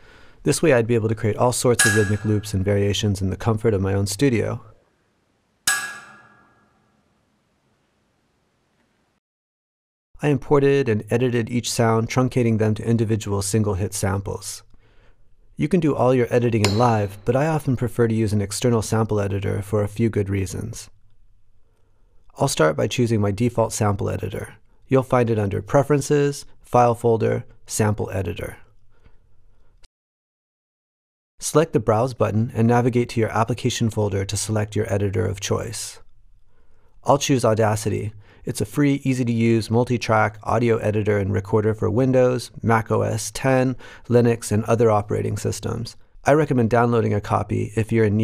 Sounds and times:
Speech: 0.4s - 4.8s, 10.2s - 14.7s, 15.6s - 20.9s, 22.4s - 28.7s, 31.4s - 36.0s, 37.0s - 48.2s.

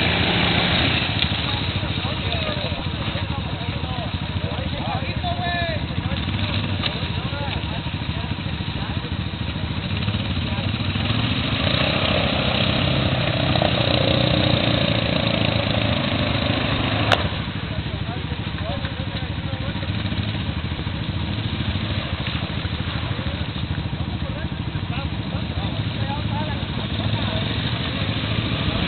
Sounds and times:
Speech: 1.3s - 11.0s, 17.5s - 20.6s, 21.8s - 28.8s.

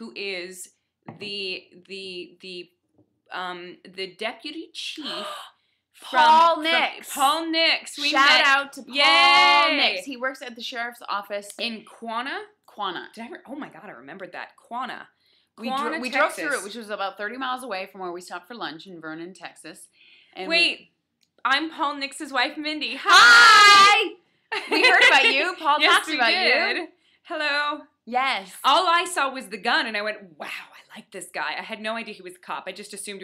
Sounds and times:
Speech: 0.0s - 2.7s, 3.3s - 20.8s, 24.8s - 33.2s.

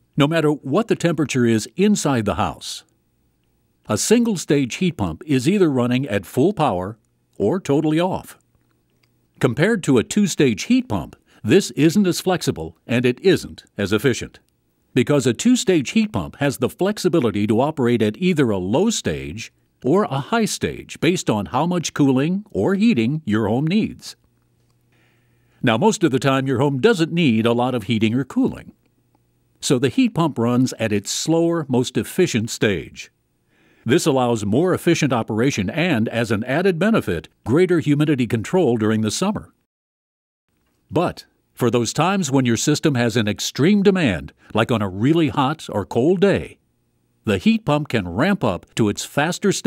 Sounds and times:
Speech: 0.2s - 2.9s, 3.9s - 8.4s, 9.4s - 24.2s, 25.6s - 28.8s, 29.6s - 33.2s, 33.9s - 39.7s, 40.9s - 46.6s, 47.2s - 49.6s.

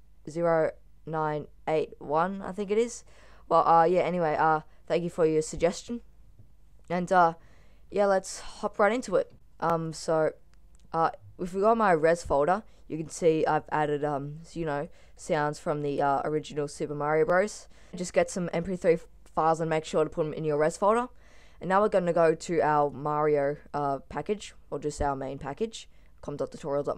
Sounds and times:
Speech: 0.3s - 6.0s, 6.9s - 26.9s.

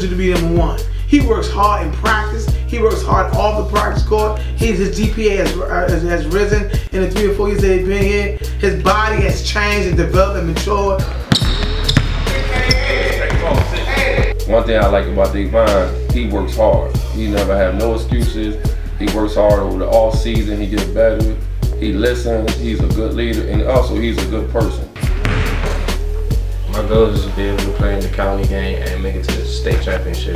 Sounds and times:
Speech: 0.0s - 11.1s, 12.4s - 24.9s, 26.6s - 30.3s
Music: 0.0s - 30.3s.

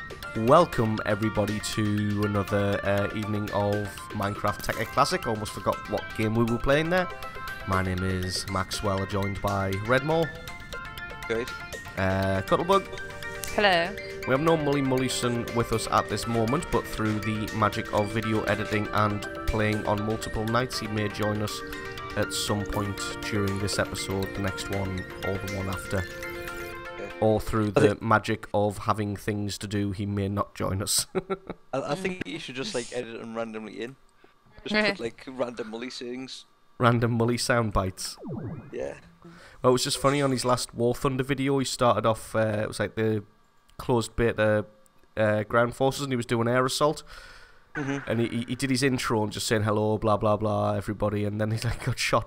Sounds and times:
Music: 0.0s - 28.4s, 47.8s - 51.8s
Speech: 0.4s - 7.1s, 7.7s - 10.3s, 11.3s - 12.9s, 13.6s - 21.6s, 22.2s - 26.1s, 27.1s - 31.1s, 31.8s - 34.0s, 34.6s - 39.0s, 39.6s - 47.0s, 47.8s - 52.2s.

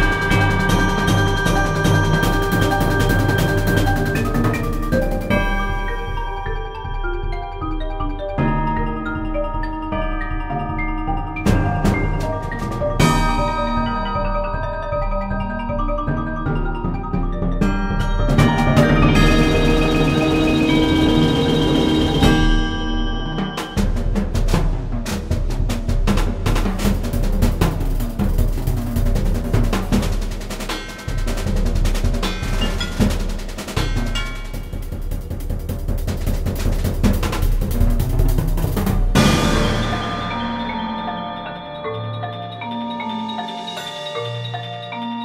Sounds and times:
Drum roll: 0.0s - 16.9s, 17.5s - 41.9s
Drum kit: 0.0s - 45.1s.

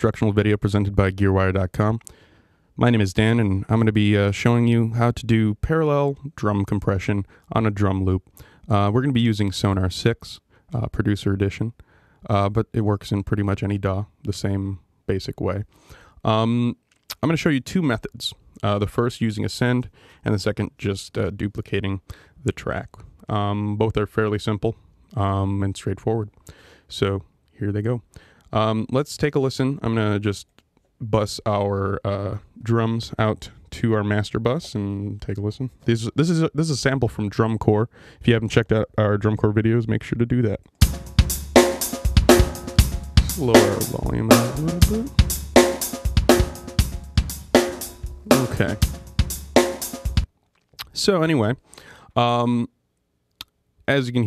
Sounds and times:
Speech: 0.0s - 2.0s, 2.8s - 40.7s, 43.3s - 45.1s, 48.3s - 48.8s, 50.8s - 51.6s, 52.2s - 52.7s, 53.9s - 54.2s.

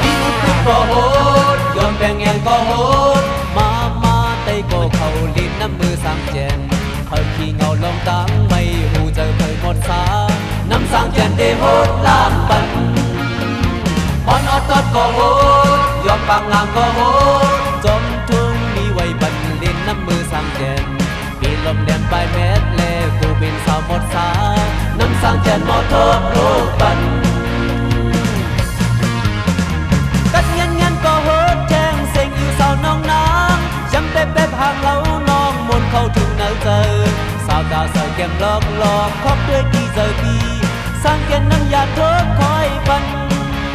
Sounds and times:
Music: 0.0s - 43.7s.

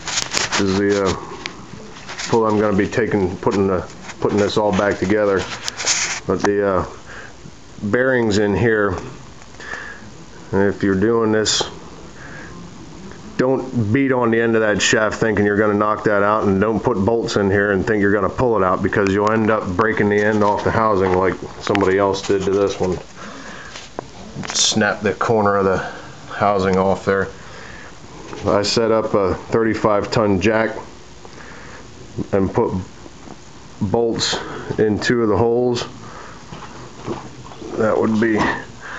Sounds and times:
Speech: 0.6s - 1.3s, 2.2s - 5.5s, 6.2s - 7.0s, 7.8s - 9.1s, 10.5s - 11.8s, 13.3s - 23.1s, 24.4s - 27.4s, 28.4s - 30.9s, 32.2s - 32.9s, 33.8s - 36.0s, 37.1s - 38.7s.

